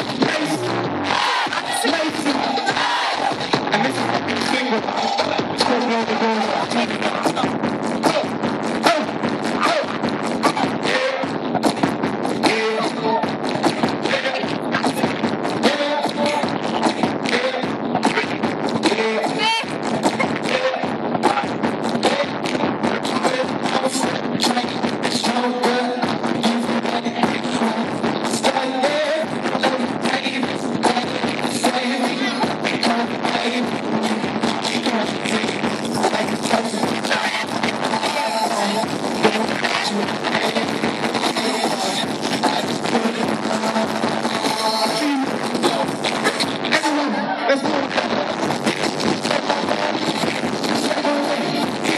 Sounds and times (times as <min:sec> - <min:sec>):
Cacophony: 0:00.0 - 0:51.9
Music: 0:00.0 - 0:51.9.